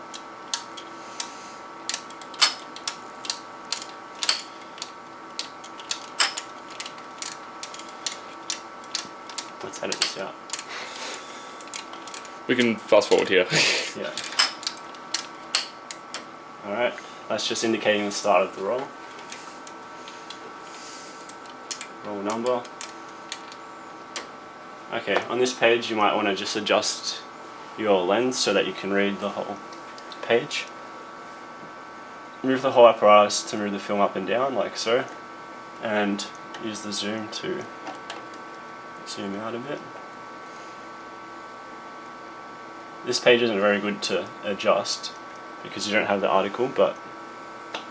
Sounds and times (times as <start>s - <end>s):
Speech: 9.6s - 10.4s, 12.5s - 14.2s, 16.6s - 19.0s, 22.0s - 22.7s, 24.9s - 29.6s, 30.2s - 30.8s, 32.4s - 35.2s, 35.8s - 37.7s, 39.1s - 39.9s, 43.0s - 47.0s.